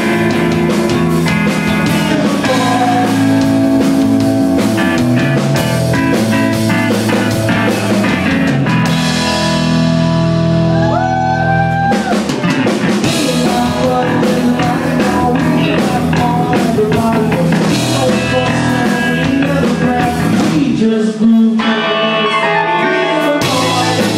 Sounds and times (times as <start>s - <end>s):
Music: 0.0s - 24.1s.